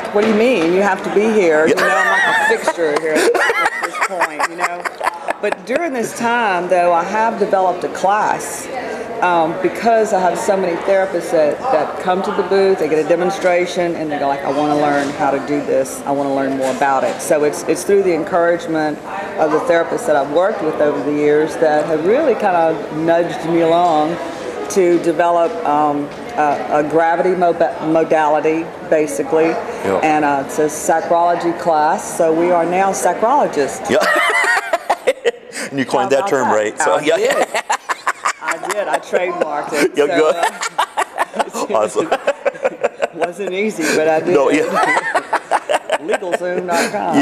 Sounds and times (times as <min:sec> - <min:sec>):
Laughter: 0:01.7 - 0:06.3, 0:33.9 - 0:35.5, 0:37.1 - 0:44.0, 0:44.6 - 0:47.0
Speech: 0:29.2 - 0:30.4, 0:35.8 - 0:37.4, 0:38.4 - 0:40.6, 0:46.1 - 0:47.2.